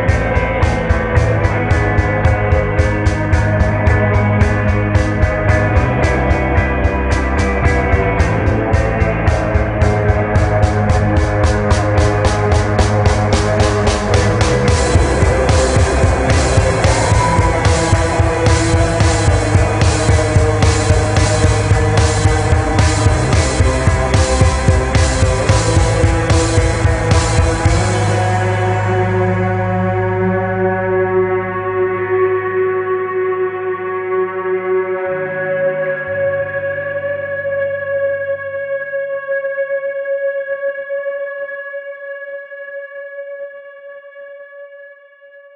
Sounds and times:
Music: 0:00.0 - 0:45.5.

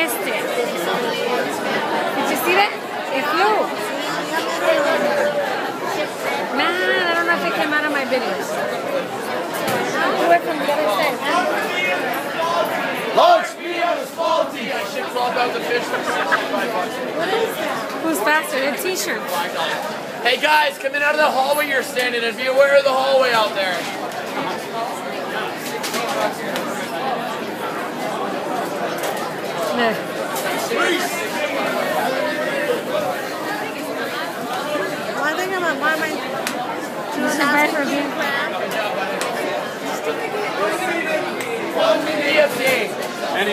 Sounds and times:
Inside, public space: 0:00.0 - 0:43.5
Speech: 0:00.0 - 0:43.5.

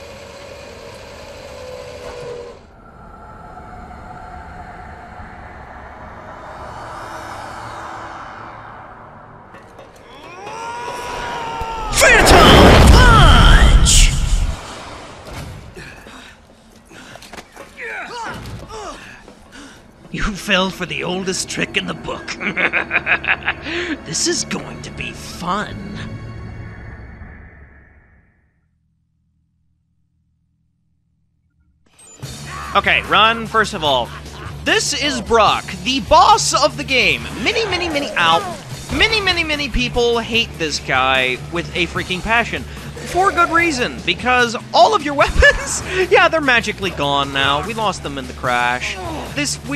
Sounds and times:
Music: 0:19.6 - 0:27.6, 0:31.9 - 0:49.7
Speech: 0:34.7 - 0:49.7.

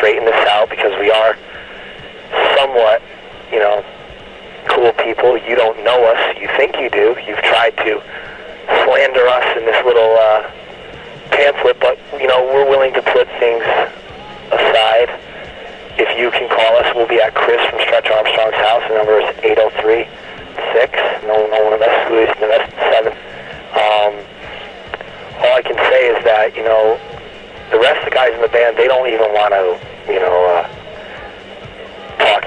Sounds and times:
Speech: 0:00.0 - 0:01.4, 0:02.3 - 0:03.9, 0:04.7 - 0:10.5, 0:11.3 - 0:15.2, 0:16.0 - 0:24.6, 0:25.4 - 0:31.3, 0:32.0 - 0:32.4.

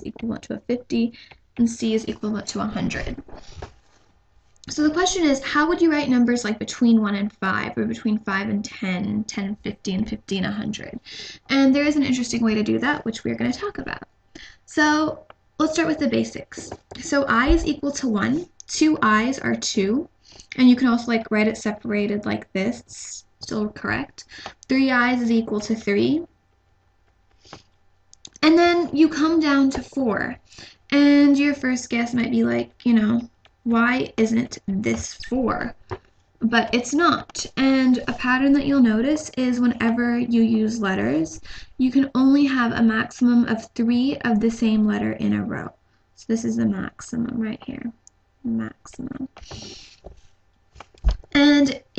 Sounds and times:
Speech: 0:00.0 - 0:03.3, 0:04.7 - 0:14.1, 0:14.7 - 0:26.3, 0:28.3 - 0:35.8, 0:36.4 - 0:49.7, 0:51.4 - 0:51.9.

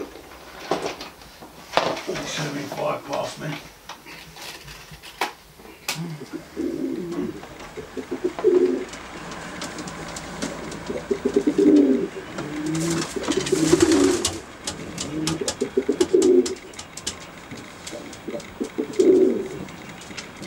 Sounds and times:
Coo: 0:06.0 - 0:09.0, 0:09.7 - 0:16.8, 0:17.6 - 0:19.8.

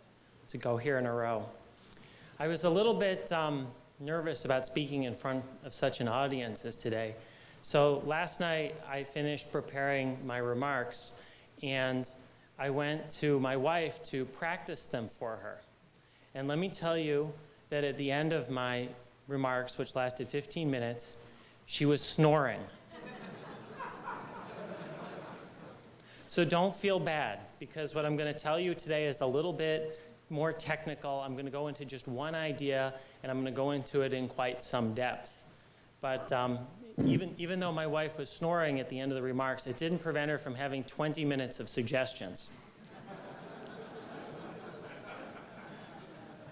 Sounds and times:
Narration, monologue: 0:00.0 - 0:44.4
Male speech, man speaking: 0:00.5 - 0:01.6, 0:02.4 - 0:15.7, 0:16.4 - 0:22.8, 0:26.3 - 0:35.4, 0:36.0 - 0:42.5.

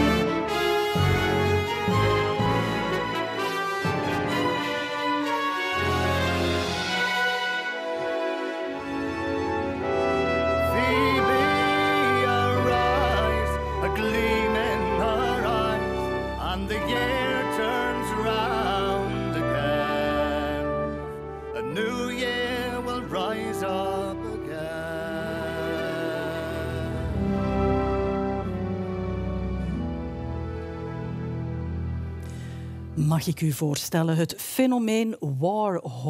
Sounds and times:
Music: 0:00.0 - 0:33.8
Speech: 0:33.0 - 0:36.0.

